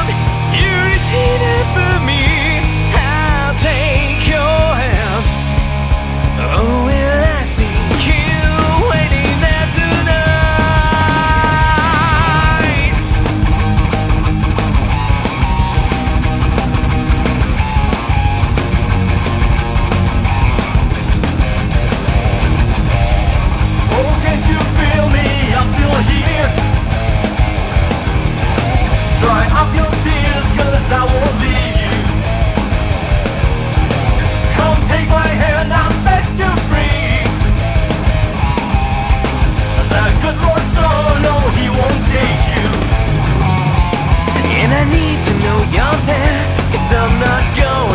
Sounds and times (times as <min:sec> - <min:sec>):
Music: 0:00.0 - 0:47.9.